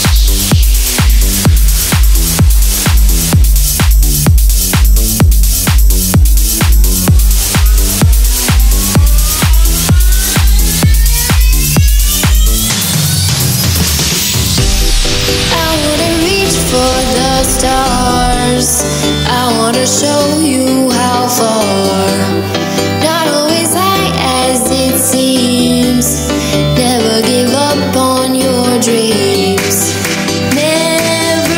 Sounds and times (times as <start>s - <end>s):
Background music: 0.0s - 31.5s.